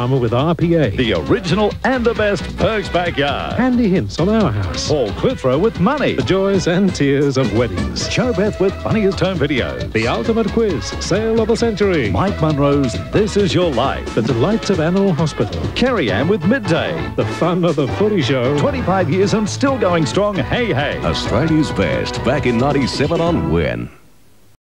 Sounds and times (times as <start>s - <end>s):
Television: 0.0s - 10.8s, 14.1s - 24.5s
Music: 0.0s - 24.0s
Speech: 0.0s - 24.0s.